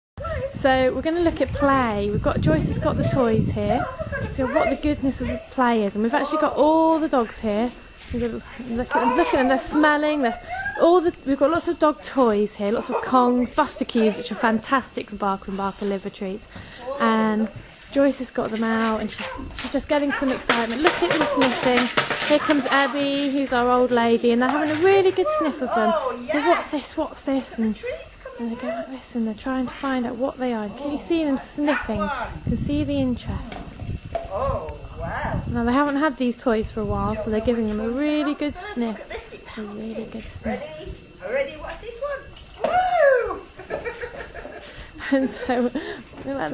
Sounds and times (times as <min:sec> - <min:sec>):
Speech: 0:00.4 - 0:33.5, 0:34.4 - 0:40.9.